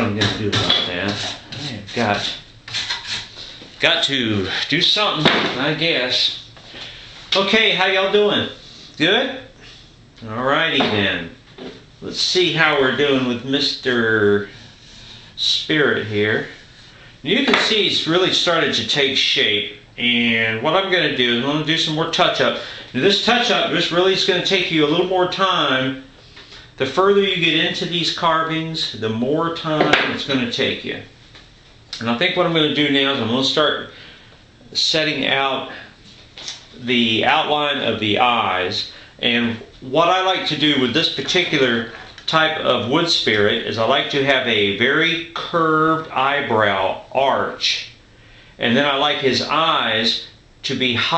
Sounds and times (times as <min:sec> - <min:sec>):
Speech: 0:00.0 - 0:02.5, 0:03.8 - 0:06.5, 0:07.3 - 0:14.6, 0:15.4 - 0:16.6, 0:17.2 - 0:26.1, 0:26.8 - 0:31.2, 0:32.0 - 0:34.0, 0:34.6 - 0:48.0, 0:48.6 - 0:51.1.